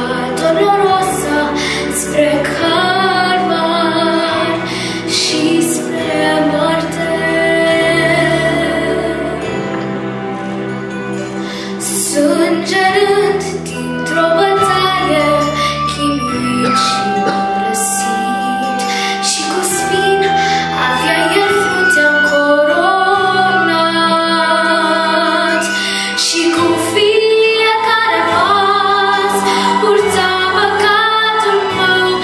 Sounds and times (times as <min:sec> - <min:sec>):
Inside, large room or hall: 0:00.0 - 0:32.2
Music: 0:00.0 - 0:32.2
Singing: 0:16.2 - 0:32.2.